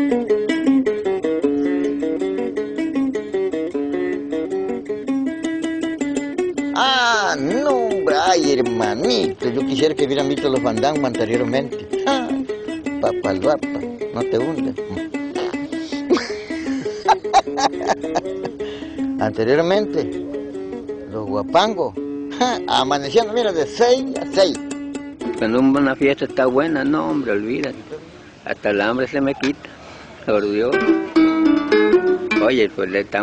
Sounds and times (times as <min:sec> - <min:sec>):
Music: 0:00.0 - 0:28.4, 0:30.3 - 0:33.2.